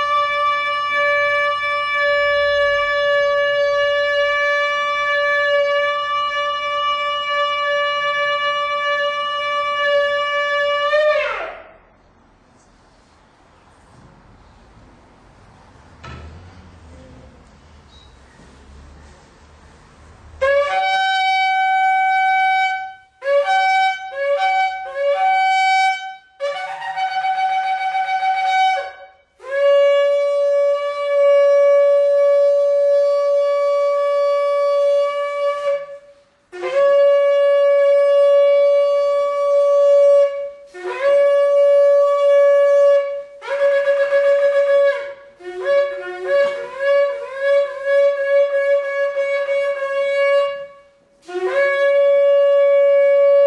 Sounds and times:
Wind instrument, woodwind instrument: 0.0 - 11.8, 20.4 - 53.4
Shofar: 0.0 - 11.9, 20.4 - 53.4.

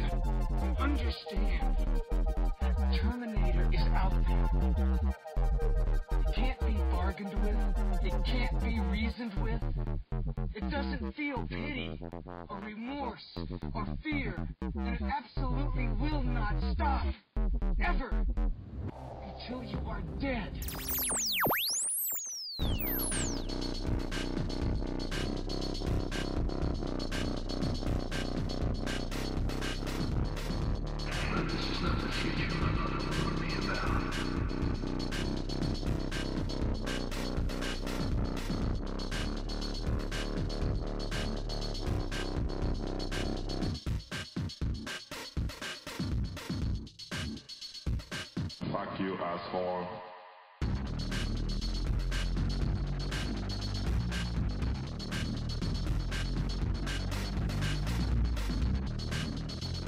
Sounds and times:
Speech: 0.0 - 1.8, 2.6 - 4.6, 6.3 - 9.8, 10.5 - 17.2, 17.8 - 18.2, 19.2 - 20.7, 31.1 - 34.7, 48.6 - 50.2
Music: 0.0 - 59.8.

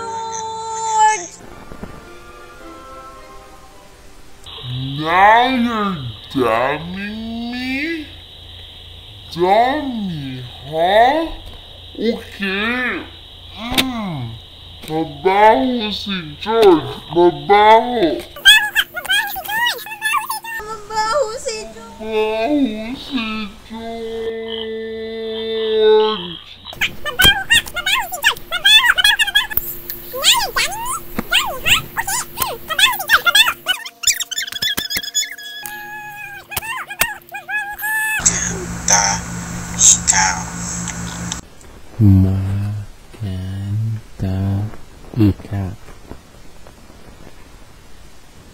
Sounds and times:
Speech: 12.0 - 29.6, 36.0 - 40.8, 42.0 - 45.8.

